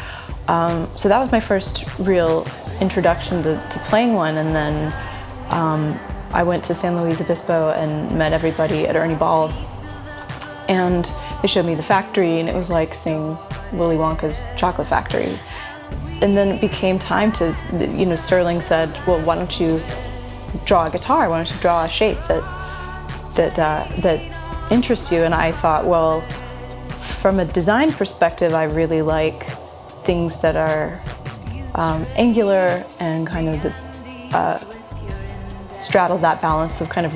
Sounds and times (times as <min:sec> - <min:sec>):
Speech: 0:00.4 - 0:15.5, 0:16.2 - 0:20.0, 0:20.6 - 0:26.3, 0:27.0 - 0:31.0, 0:31.6 - 0:35.2, 0:35.8 - 0:37.1.